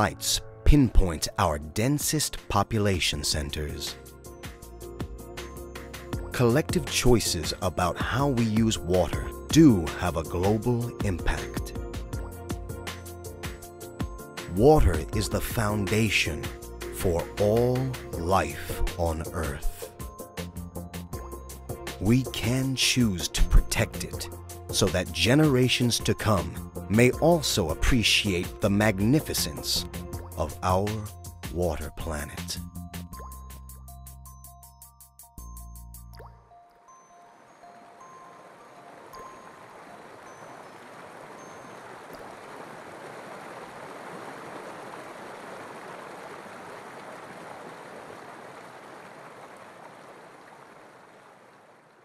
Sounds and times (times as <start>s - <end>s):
Music: 0.0s - 42.2s
Water: 36.1s - 52.0s.